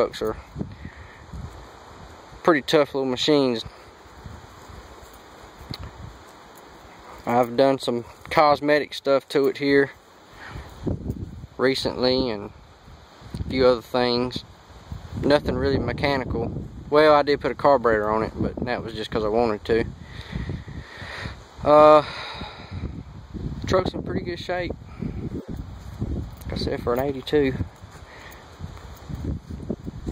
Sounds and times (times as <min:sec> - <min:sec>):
Speech: 0:00.0 - 0:00.4, 0:02.4 - 0:03.8, 0:07.2 - 0:10.0, 0:11.6 - 0:12.5, 0:13.5 - 0:14.4, 0:15.2 - 0:19.9, 0:21.6 - 0:22.1, 0:23.6 - 0:24.8, 0:26.4 - 0:27.6.